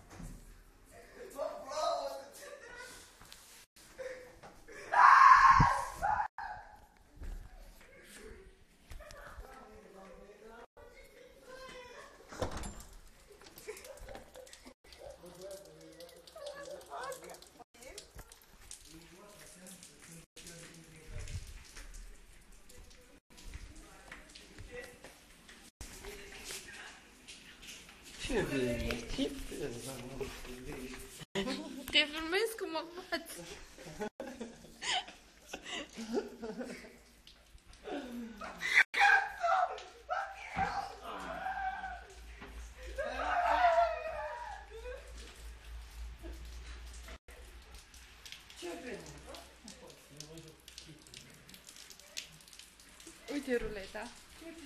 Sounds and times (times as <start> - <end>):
Door: 12.3 - 13.0.